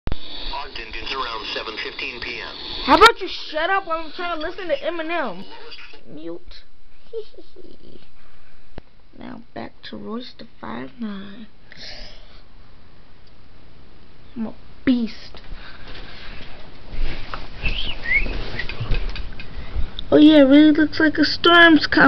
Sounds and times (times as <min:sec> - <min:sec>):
Inside, small room: 0:00.1 - 0:22.0
Speech: 0:00.5 - 0:05.4.